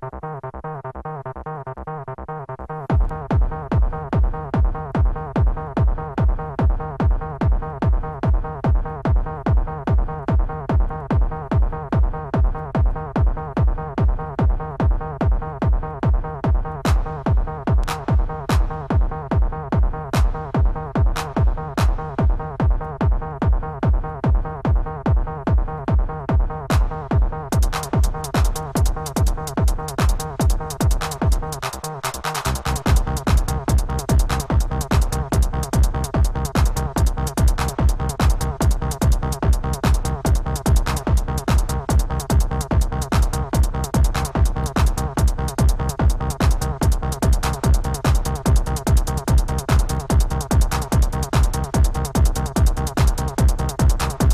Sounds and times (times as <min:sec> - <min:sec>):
Techno: 0:00.0 - 0:54.3.